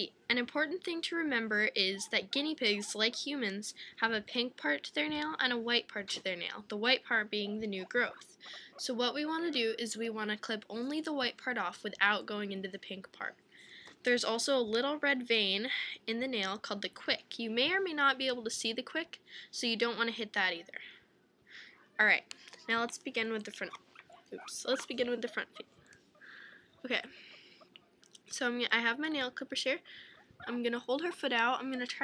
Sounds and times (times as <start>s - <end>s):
Speech: 0.0s - 13.4s, 14.0s - 21.0s, 22.0s - 23.8s, 24.4s - 25.6s, 26.8s - 27.2s, 28.2s - 32.0s.